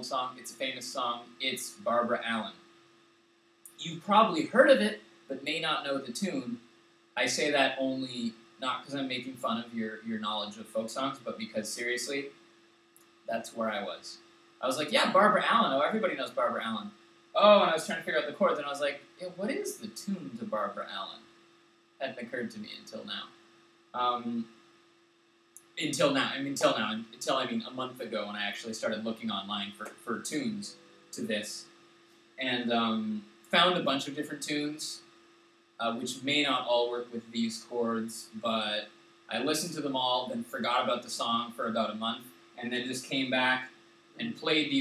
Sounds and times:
Speech: 0.0 - 2.6, 3.7 - 6.6, 7.2 - 12.3, 13.3 - 21.2, 22.0 - 23.3, 24.0 - 24.5, 25.8 - 31.7, 32.4 - 35.0, 35.8 - 44.8.

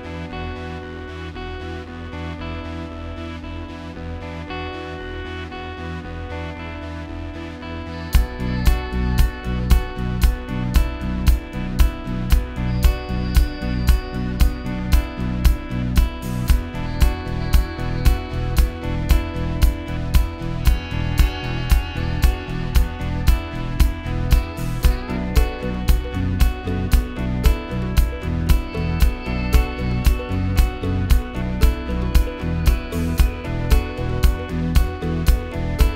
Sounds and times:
Music: 0.0 - 35.9.

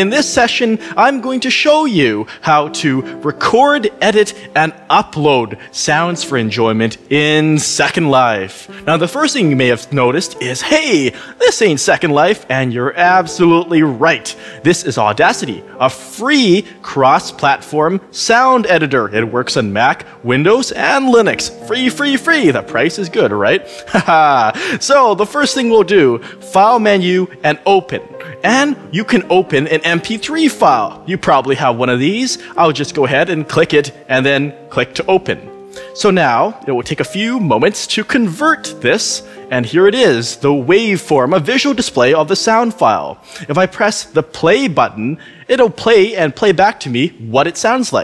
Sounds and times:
Music: 0.0 - 48.0
Speech: 0.0 - 48.0.

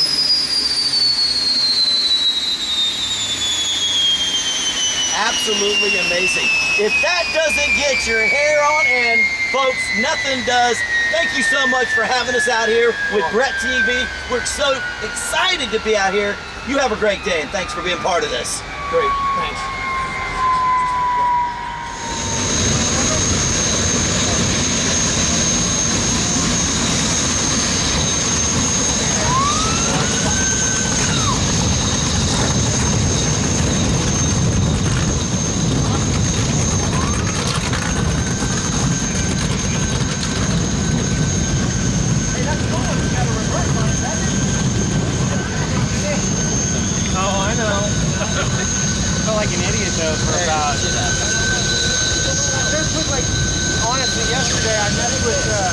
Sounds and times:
Motorboat, speedboat: 0.0 - 11.9, 22.5 - 40.6
Outside, rural or natural: 0.0 - 55.7.

